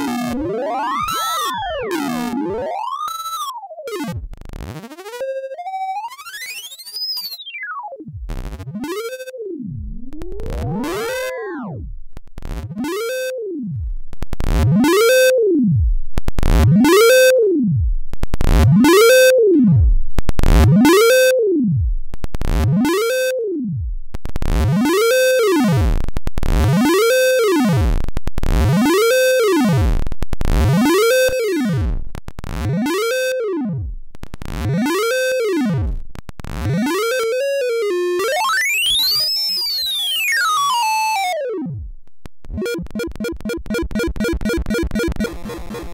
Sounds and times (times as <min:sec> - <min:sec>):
Effects unit: 0:00.0 - 0:45.9.